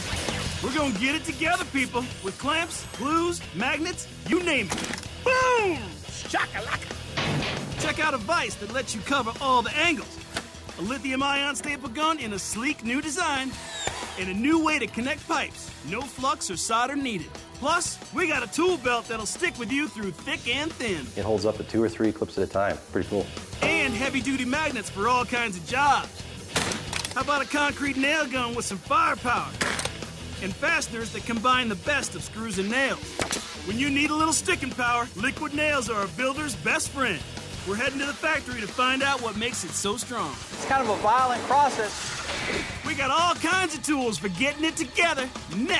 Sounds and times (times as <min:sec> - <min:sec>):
Music: 0:00.0 - 0:45.7
Speech: 0:00.6 - 0:04.7, 0:05.3 - 0:06.8, 0:07.8 - 0:10.2, 0:10.8 - 0:13.5, 0:14.2 - 0:26.1, 0:27.2 - 0:29.6, 0:30.4 - 0:33.0, 0:33.7 - 0:42.0, 0:42.8 - 0:45.7.